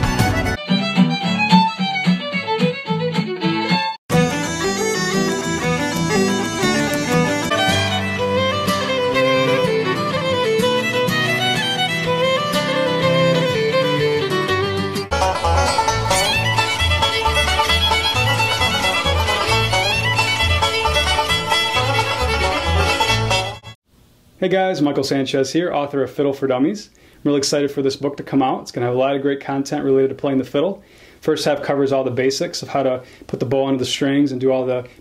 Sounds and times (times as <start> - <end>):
Pizzicato: 0.1 - 11.5, 15.1 - 23.6.